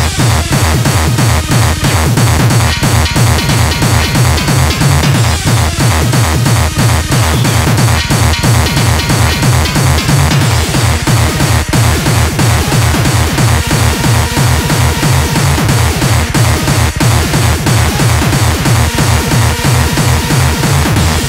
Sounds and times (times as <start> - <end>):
Techno: 0.0 - 21.2.